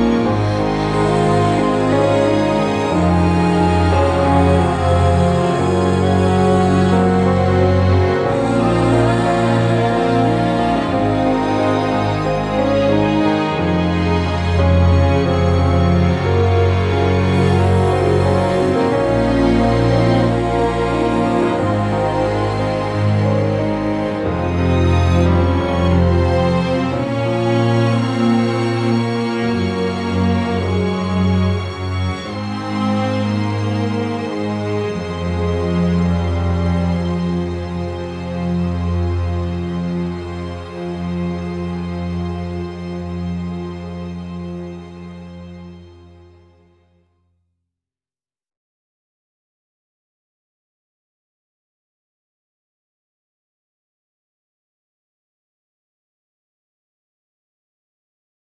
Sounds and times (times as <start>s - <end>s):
Background music: 0.0s - 47.1s.